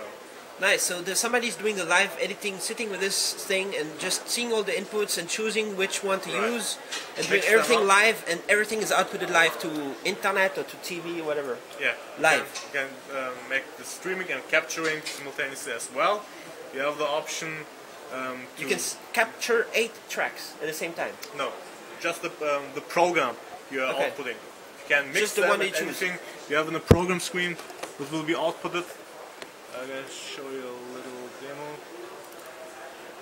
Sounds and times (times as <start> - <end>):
Speech: 16.8 - 29.0.